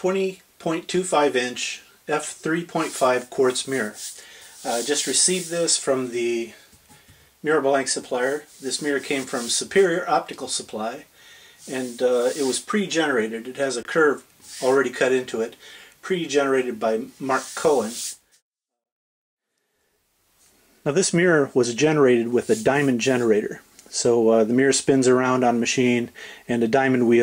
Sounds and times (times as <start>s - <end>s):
Speech: 0.0s - 6.6s, 7.4s - 18.1s, 20.8s - 27.2s.